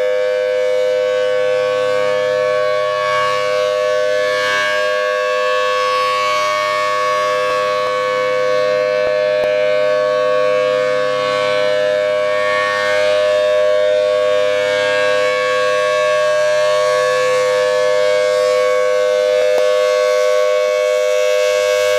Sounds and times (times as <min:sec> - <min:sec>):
Civil defense siren: 0:00.0 - 0:21.9.